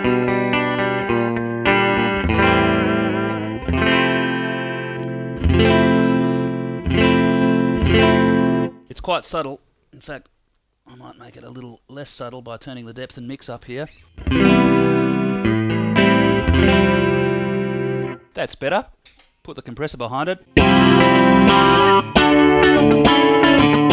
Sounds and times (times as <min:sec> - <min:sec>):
Effects unit: 0:00.0 - 0:08.8, 0:13.9 - 0:18.3, 0:20.5 - 0:23.9
Guitar: 0:00.0 - 0:08.8, 0:13.9 - 0:18.3, 0:20.5 - 0:23.9
Distortion: 0:00.0 - 0:23.9
Speech: 0:08.9 - 0:10.3, 0:10.9 - 0:14.0, 0:18.3 - 0:20.5.